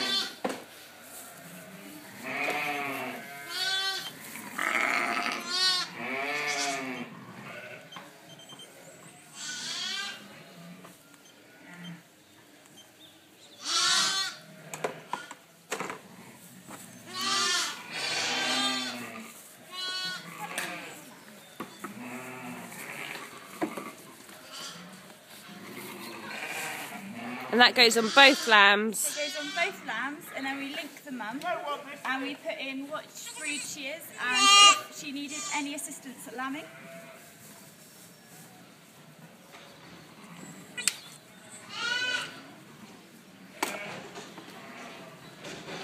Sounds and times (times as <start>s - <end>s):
Sheep: 0.0s - 13.0s, 13.6s - 15.4s, 16.0s - 30.4s, 33.2s - 45.8s.